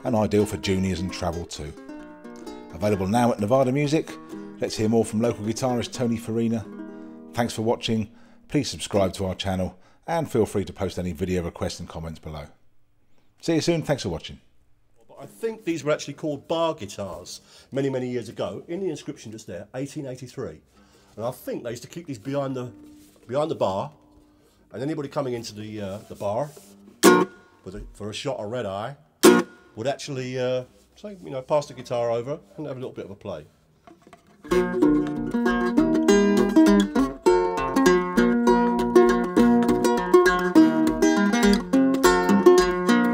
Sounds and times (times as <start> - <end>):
Speech: 0.0 - 1.8, 2.7 - 6.7, 7.4 - 12.6, 13.4 - 24.0, 24.7 - 26.6, 27.6 - 29.0, 29.8 - 33.5
Ukulele: 0.0 - 9.2, 21.2 - 27.9, 29.2 - 29.7, 33.9 - 43.1.